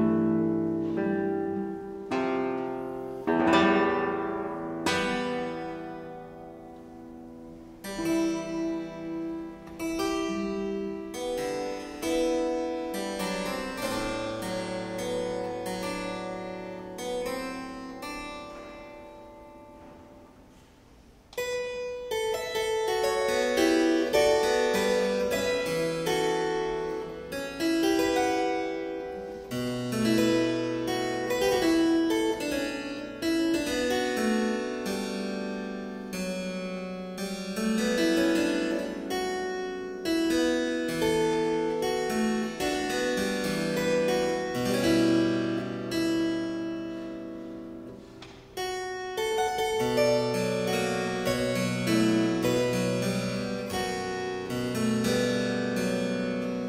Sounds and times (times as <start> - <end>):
Piano: 0.0 - 20.6, 21.3 - 56.6.